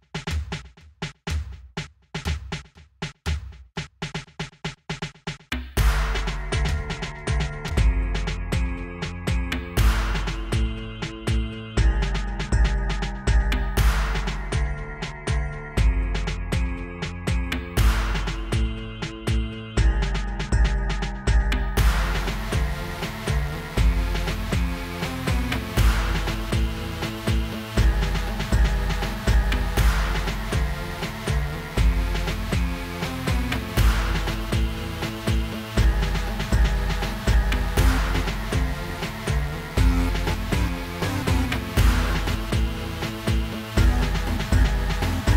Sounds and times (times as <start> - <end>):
Music: 0.0 - 45.3.